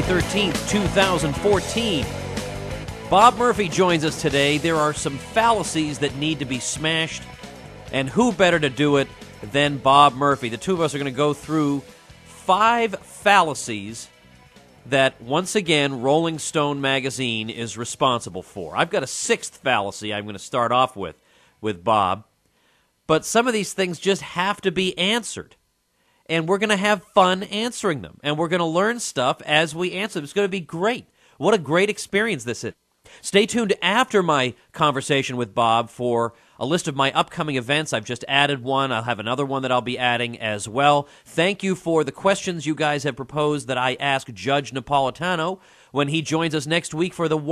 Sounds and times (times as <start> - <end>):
Speech: 0.0 - 2.1, 3.1 - 7.3, 7.9 - 14.1, 14.9 - 22.3, 23.1 - 25.6, 26.3 - 47.5.